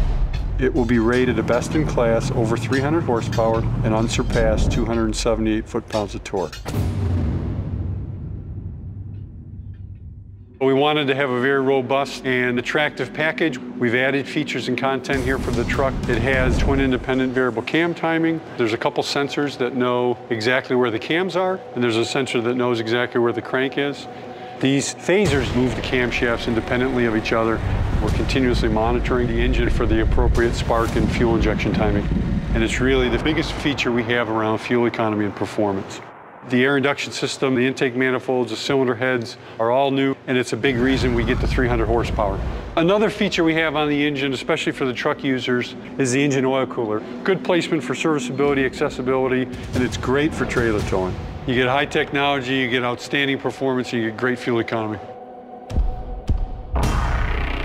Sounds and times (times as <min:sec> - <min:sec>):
Music: 0:00.0 - 0:34.1, 0:40.8 - 0:57.6
Speech: 0:00.6 - 0:06.7, 0:10.6 - 0:55.1.